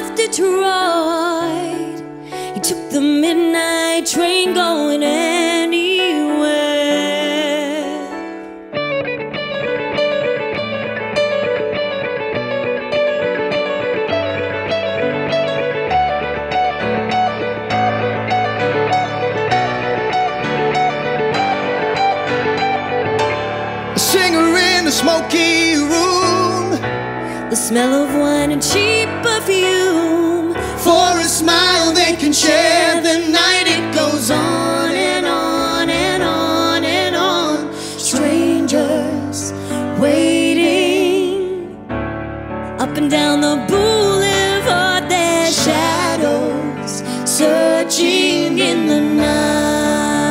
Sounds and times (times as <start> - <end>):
Guitar: 0.0 - 50.3
Pop music: 12.8 - 41.8, 42.8 - 50.3.